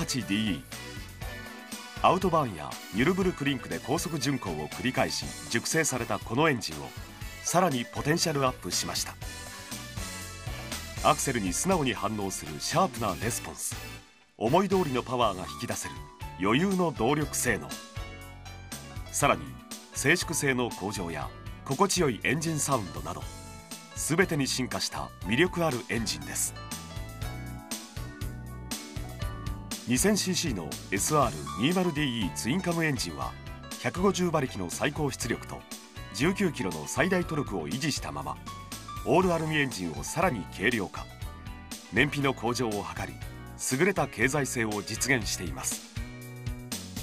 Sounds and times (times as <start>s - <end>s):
Speech: 0.0s - 0.6s, 2.0s - 9.2s, 11.0s - 13.8s, 14.4s - 17.8s, 19.2s - 23.3s, 24.0s - 26.6s, 29.9s - 35.6s, 36.2s - 38.4s, 39.0s - 41.1s, 41.9s - 45.8s
Music: 0.0s - 47.0s.